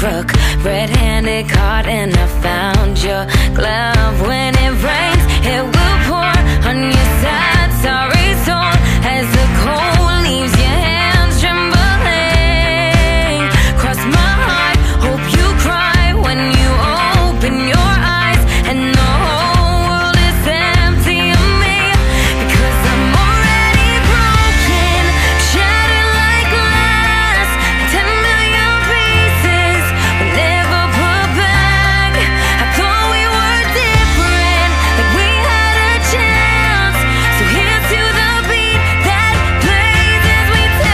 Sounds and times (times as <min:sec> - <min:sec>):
Music: 0:00.0 - 0:40.9.